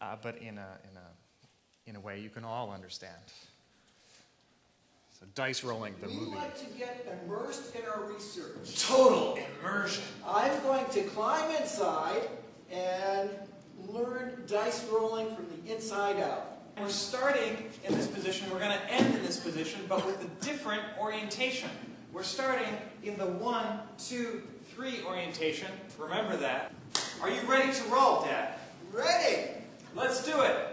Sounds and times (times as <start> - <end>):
Male speech, man speaking: 0.0 - 1.2, 1.8 - 3.4, 5.2 - 30.7.